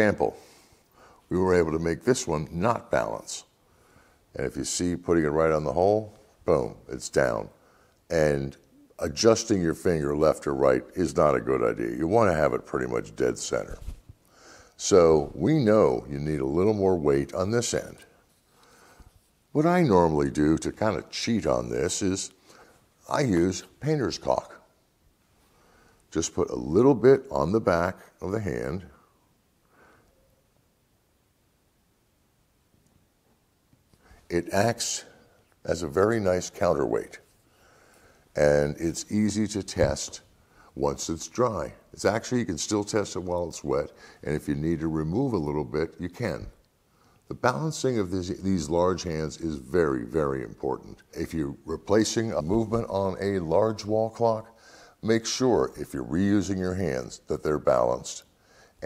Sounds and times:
Speech: 0.0 - 0.4, 1.3 - 3.6, 4.3 - 14.0, 14.8 - 18.2, 19.5 - 22.4, 23.0 - 24.8, 26.1 - 29.1, 34.3 - 37.3, 38.4 - 46.6, 47.3 - 58.8.

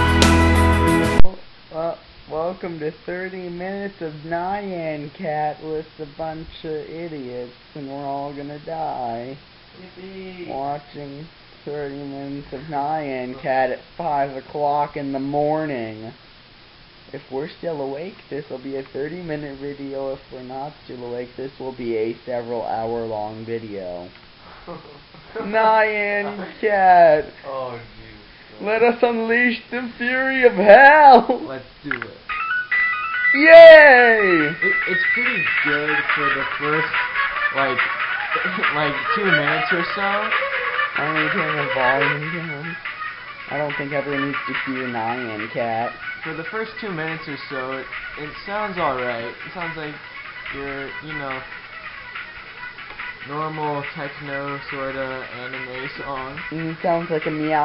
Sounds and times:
Music: 0.0 - 1.3, 32.4 - 36.9.

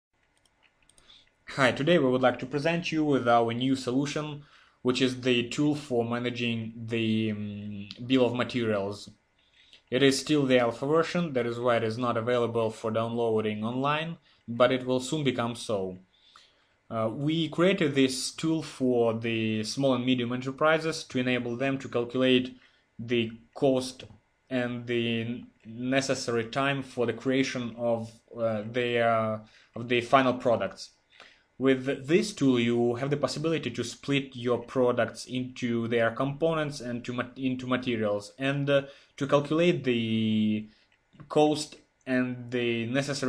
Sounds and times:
Speech: 1.5 - 9.2, 9.9 - 16.0, 16.9 - 30.9, 31.6 - 43.2.

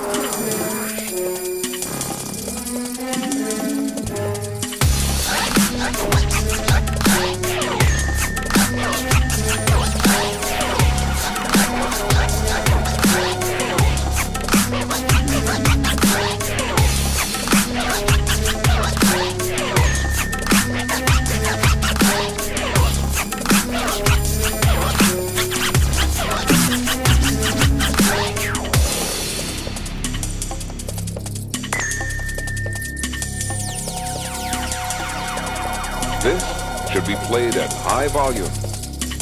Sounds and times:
Dubstep: 0.0 - 31.7, 33.0 - 39.2.

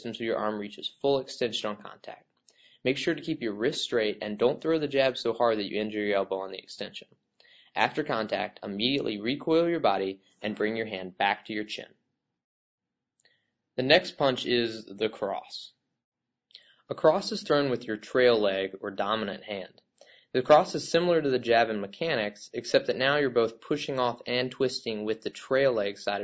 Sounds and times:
Speech: 0.0 - 2.2, 2.8 - 7.1, 7.7 - 11.9, 13.8 - 15.8, 16.9 - 26.2.

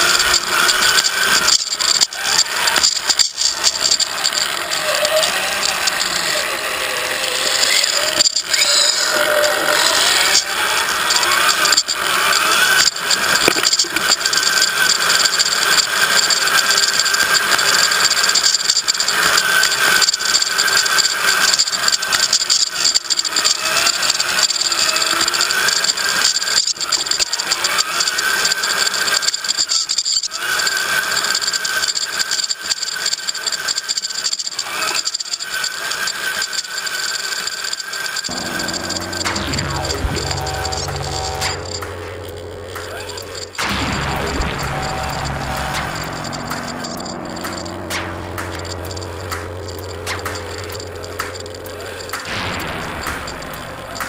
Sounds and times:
Vehicle: 0.0 - 54.0.

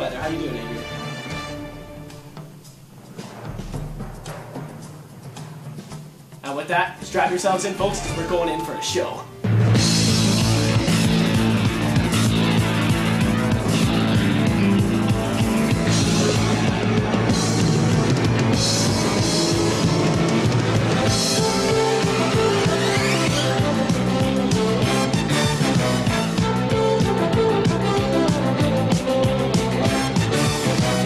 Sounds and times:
Speech: 0.0 - 0.8, 6.4 - 9.3
Music: 0.0 - 31.0.

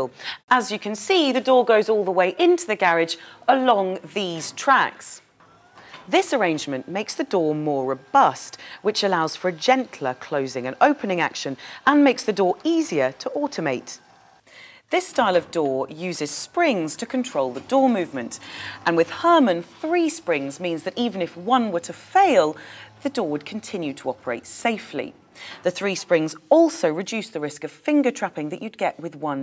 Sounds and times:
Speech: 0.0 - 5.2, 6.1 - 14.0, 14.9 - 29.4.

